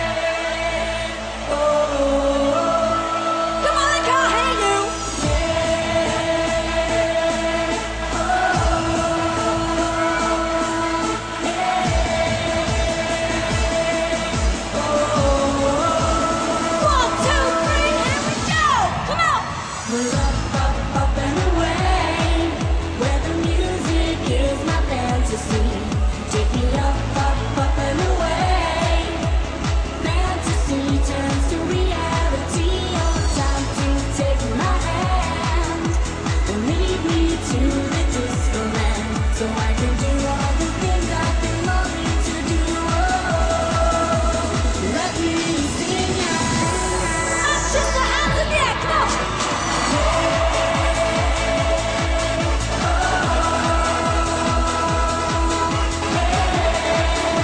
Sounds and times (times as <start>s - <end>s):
Music: 0.0s - 57.4s.